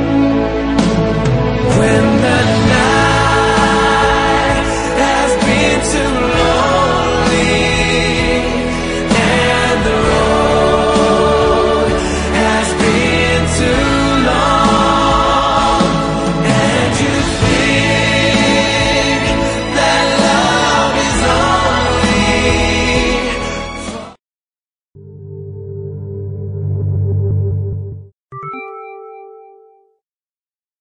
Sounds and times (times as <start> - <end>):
Music: 0.0 - 24.2, 25.0 - 30.0.